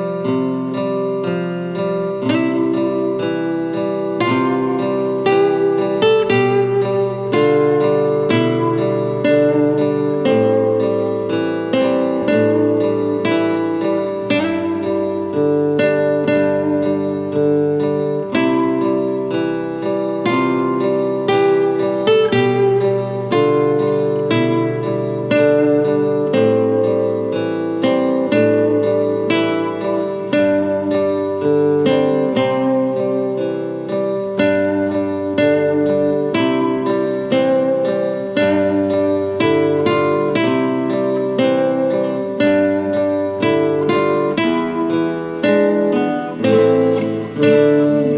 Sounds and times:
Acoustic guitar: 0:00.0 - 0:48.1
Strum: 0:00.0 - 0:48.1.

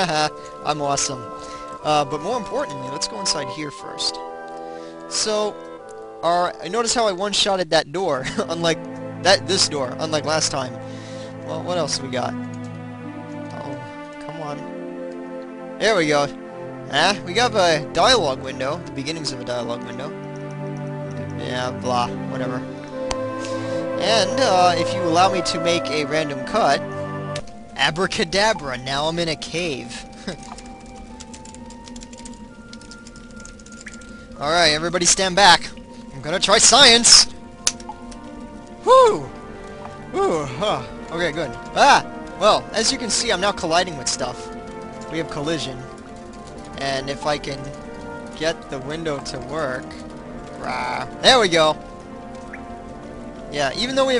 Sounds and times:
Speech: 0:00.0 - 0:01.2, 0:01.8 - 0:04.2, 0:05.1 - 0:05.6, 0:06.2 - 0:10.8, 0:11.5 - 0:12.4, 0:15.8 - 0:20.1, 0:21.4 - 0:22.6, 0:24.0 - 0:26.8, 0:27.8 - 0:30.0, 0:34.4 - 0:37.3, 0:40.2 - 0:44.4, 0:45.1 - 0:45.9, 0:46.8 - 0:47.7, 0:48.4 - 0:50.0, 0:50.6 - 0:51.8, 0:53.6 - 0:54.2
Music: 0:00.0 - 0:54.2.

